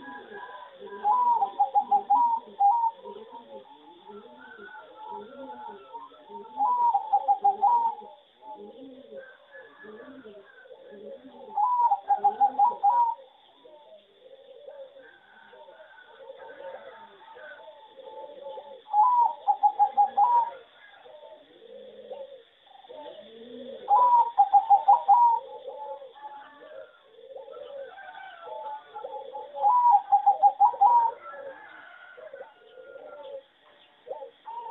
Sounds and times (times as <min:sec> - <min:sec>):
Bird vocalization, bird call, bird song: 0:00.0 - 0:34.7.